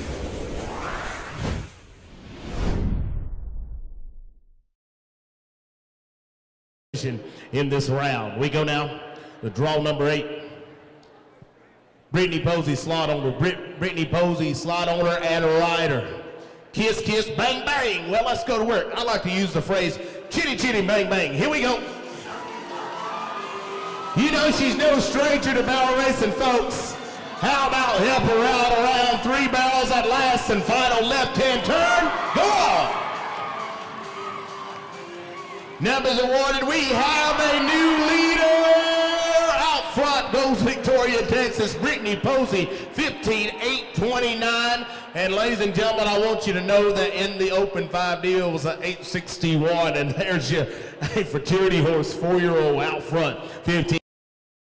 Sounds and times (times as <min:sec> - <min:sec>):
Speech: 0:07.0 - 0:10.3, 0:12.1 - 0:16.1, 0:16.7 - 0:21.8, 0:24.2 - 0:32.9, 0:35.8 - 0:54.0
Music: 0:20.8 - 0:39.2.